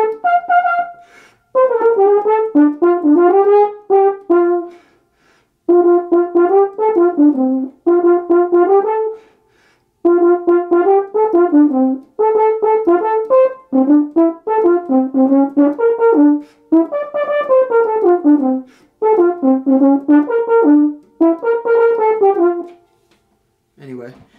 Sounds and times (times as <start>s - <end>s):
French horn: 0.0s - 9.4s, 10.0s - 23.0s.